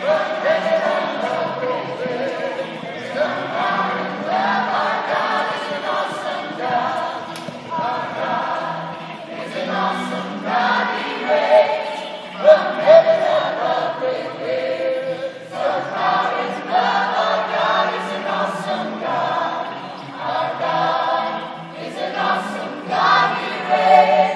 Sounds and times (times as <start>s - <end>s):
Choir: 0.0s - 24.3s.